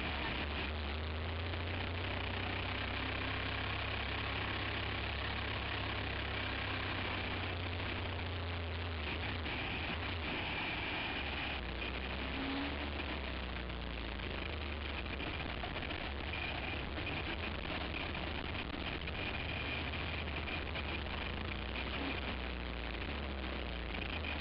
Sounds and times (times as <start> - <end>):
Car: 0.0 - 24.4.